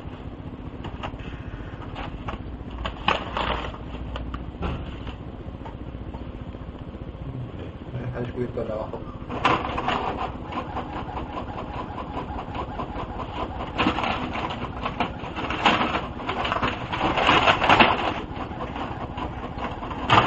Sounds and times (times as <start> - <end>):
Printer: 0.0 - 5.7, 8.3 - 20.2
Speech: 7.4 - 9.2.